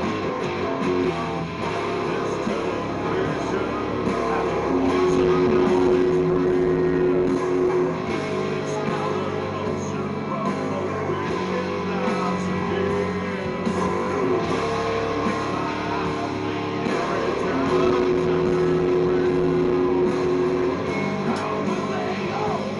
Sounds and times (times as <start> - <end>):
Music: 0.0 - 22.7.